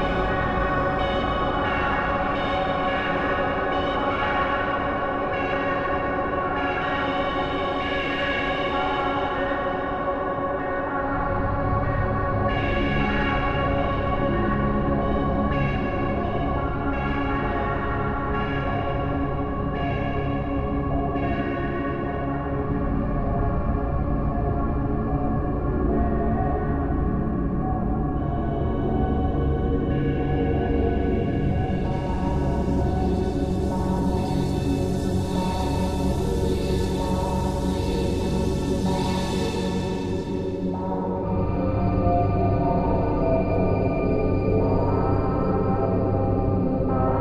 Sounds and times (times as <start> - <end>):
Ambient music: 0.0 - 47.2.